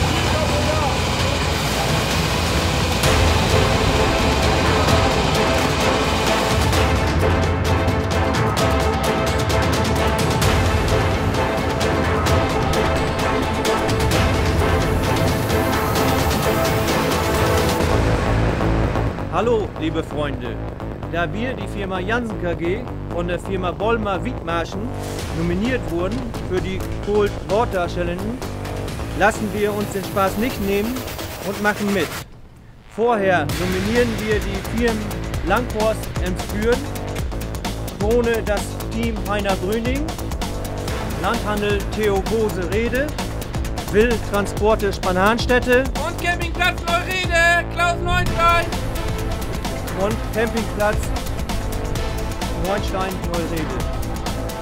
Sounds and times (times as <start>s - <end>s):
Music: 0.0s - 54.6s.